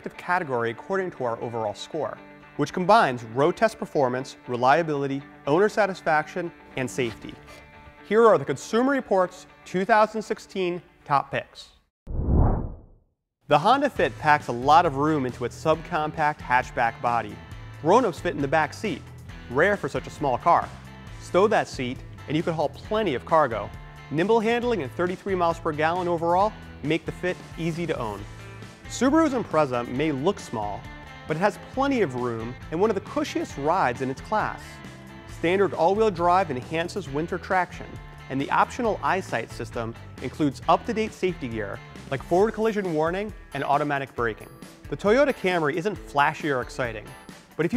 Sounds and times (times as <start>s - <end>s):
Speech: 0.0s - 7.4s, 8.1s - 11.8s, 13.5s - 28.2s, 28.9s - 34.8s, 35.4s - 47.7s
Music: 0.0s - 11.9s, 13.4s - 47.7s.